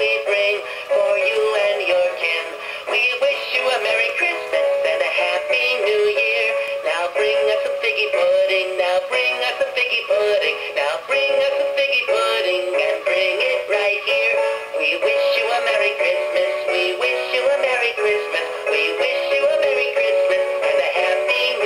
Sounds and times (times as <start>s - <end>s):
Male singing: 0.0s - 21.6s
Music: 0.0s - 21.6s
Synthetic singing: 0.0s - 21.6s.